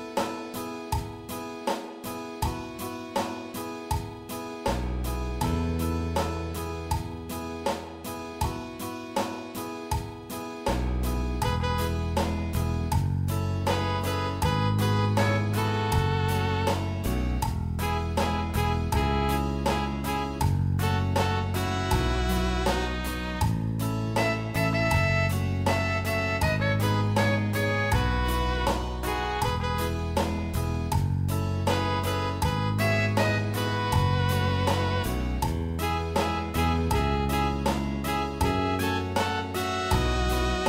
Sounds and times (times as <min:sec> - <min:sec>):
Independent music: 0:00.0 - 0:40.6
Soul music: 0:00.0 - 0:40.6.